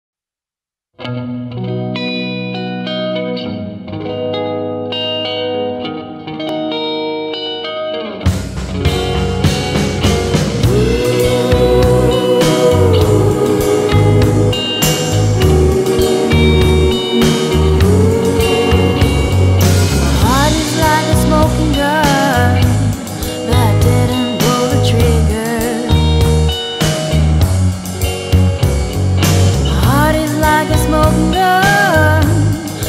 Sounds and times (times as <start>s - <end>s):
Music: 1.0s - 32.8s.